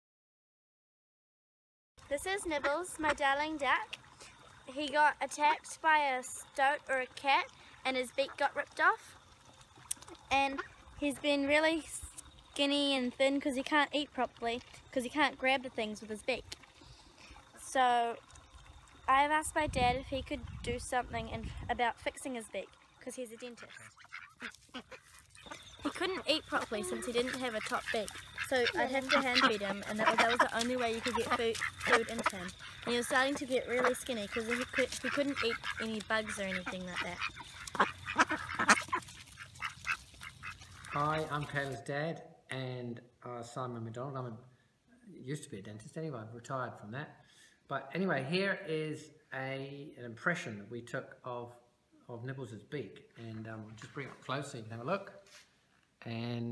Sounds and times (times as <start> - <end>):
Quack: 2.4 - 3.3, 23.3 - 33.0, 33.6 - 41.4
Speech: 19.1 - 23.7, 25.8 - 37.2.